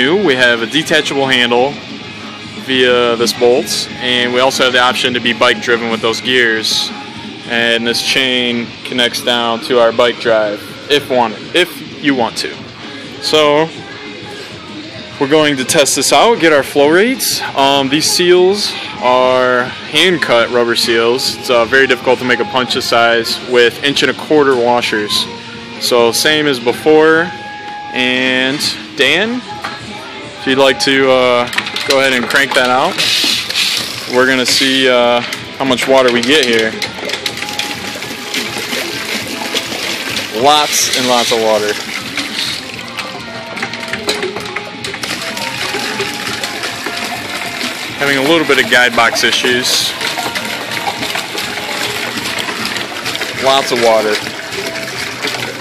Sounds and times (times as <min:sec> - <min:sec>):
Speech: 0:00.0 - 0:01.8, 0:02.7 - 0:06.9, 0:07.5 - 0:12.6, 0:15.2 - 0:27.3, 0:30.4 - 0:33.0, 0:34.1 - 0:36.8, 0:40.3 - 0:41.8, 0:48.0 - 0:50.0, 0:53.4 - 0:54.3
Music: 0:00.0 - 0:55.6.